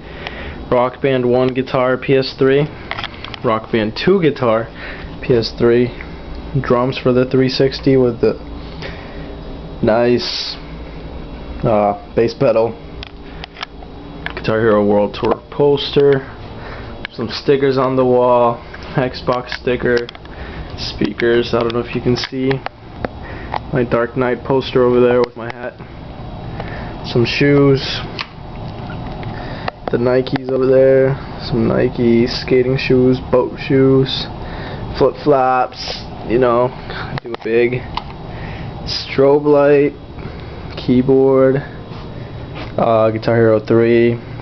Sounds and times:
Speech: 0:00.7 - 0:02.8, 0:03.4 - 0:08.4, 0:09.8 - 0:10.6, 0:11.6 - 0:12.8, 0:14.4 - 0:16.4, 0:17.1 - 0:20.2, 0:20.8 - 0:22.7, 0:23.7 - 0:25.8, 0:27.0 - 0:28.2, 0:29.9 - 0:34.3, 0:35.0 - 0:37.9, 0:38.9 - 0:40.0, 0:40.8 - 0:41.8, 0:42.8 - 0:44.2.

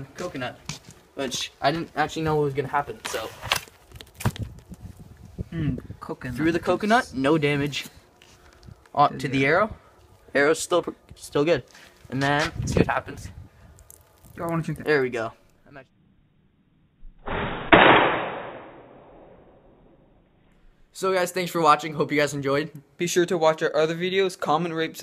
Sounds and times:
Speech: 0:00.0 - 0:00.6, 0:01.2 - 0:03.4, 0:05.6 - 0:07.9, 0:09.0 - 0:09.7, 0:10.4 - 0:13.3, 0:14.4 - 0:15.9, 0:21.0 - 0:25.0.

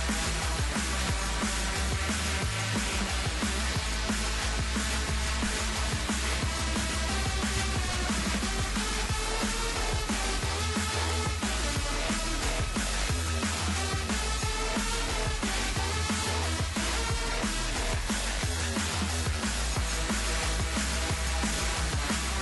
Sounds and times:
Music: 0:00.0 - 0:22.4.

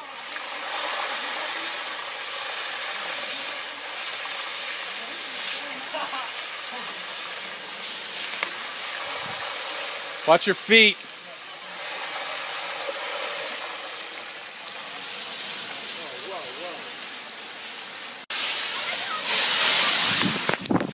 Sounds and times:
Speech: 0:10.3 - 0:11.6, 0:15.8 - 0:16.9.

